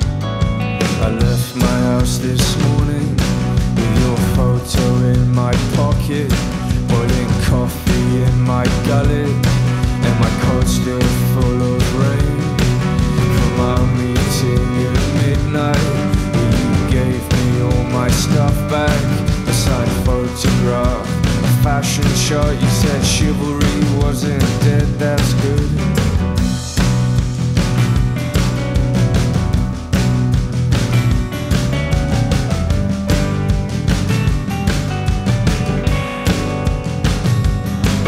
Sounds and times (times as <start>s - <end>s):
Music: 0.0s - 38.0s.